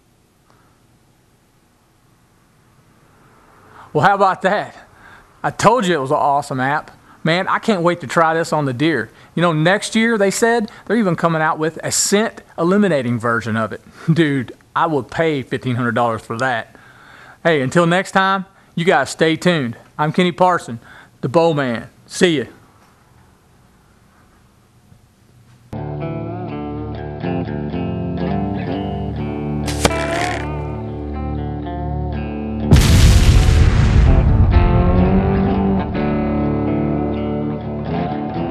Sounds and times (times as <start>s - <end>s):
Music: 25.8s - 32.8s, 34.1s - 38.5s
Boom: 32.7s - 36.5s.